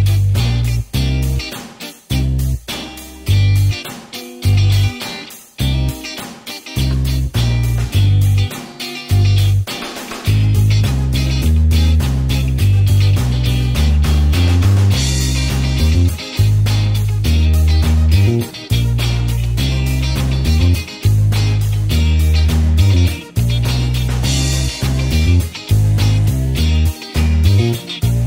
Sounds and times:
Music: 0.0s - 28.2s.

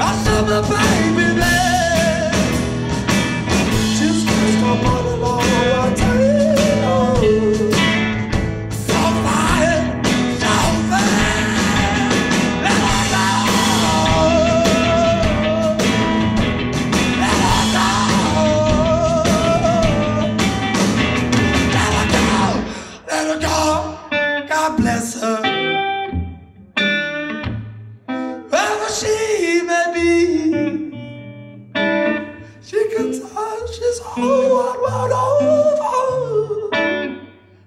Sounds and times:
Singing: 0.0s - 2.5s, 3.9s - 8.0s, 8.8s - 16.0s, 17.2s - 20.5s, 21.7s - 24.0s.

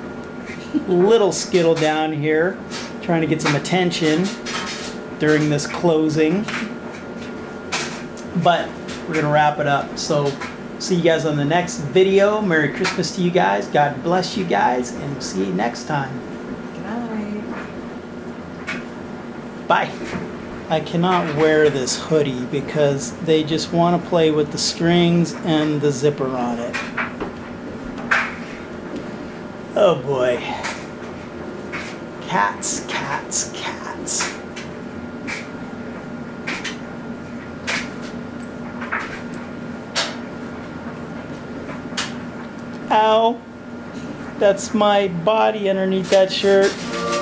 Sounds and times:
Speech: 0.8s - 4.4s, 5.2s - 6.7s, 8.2s - 16.2s, 19.7s - 20.0s, 20.7s - 26.8s, 29.8s - 30.7s, 32.2s - 34.4s, 42.9s - 43.4s, 44.4s - 47.2s.

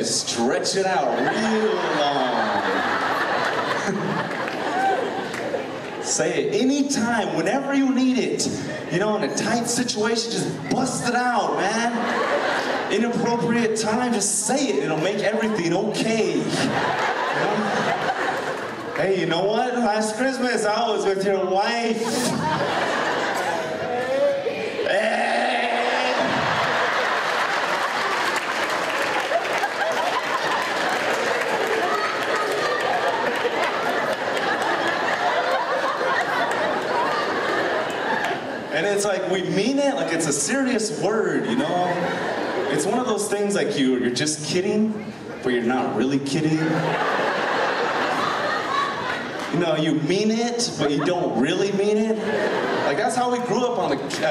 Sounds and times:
Speech: 0.0s - 2.8s, 6.0s - 12.2s, 12.9s - 16.8s, 19.0s - 22.6s, 38.7s - 47.0s, 49.5s - 54.3s.

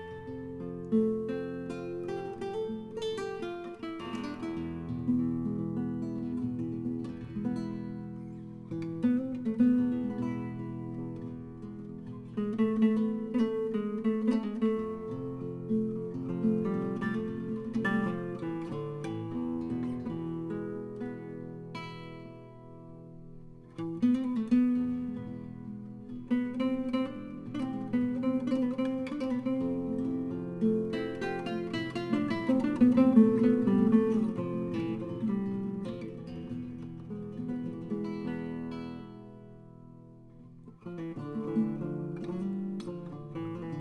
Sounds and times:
Flamenco: 0.0s - 43.8s.

